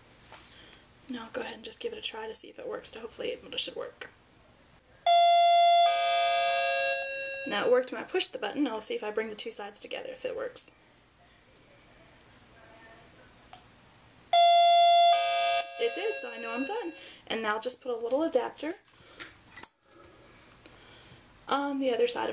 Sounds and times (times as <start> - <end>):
Doorbell: 5.1 - 7.6, 14.4 - 17.0.